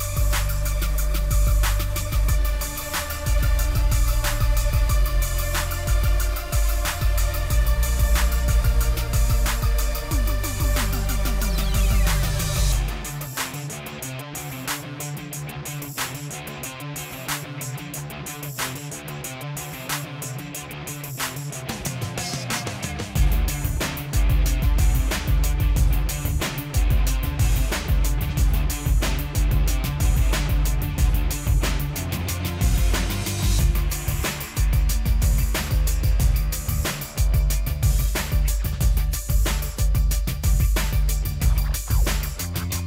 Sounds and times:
Music: 0.0s - 42.8s.

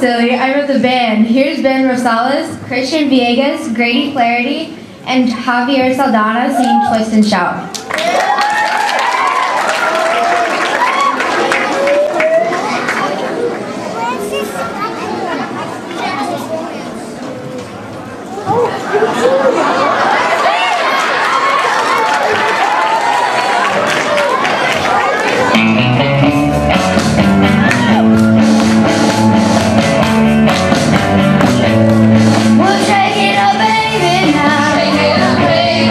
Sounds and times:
Music: 25.4s - 35.9s.

